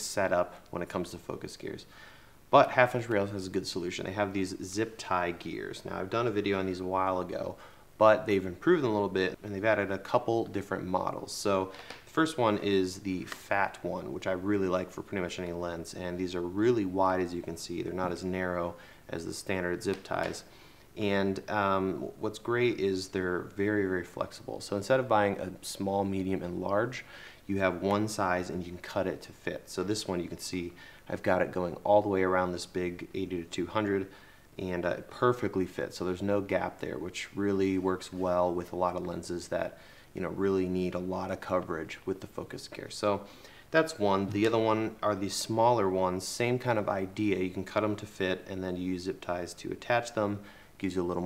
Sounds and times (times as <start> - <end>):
Speech: 0.0 - 1.9, 2.5 - 51.2.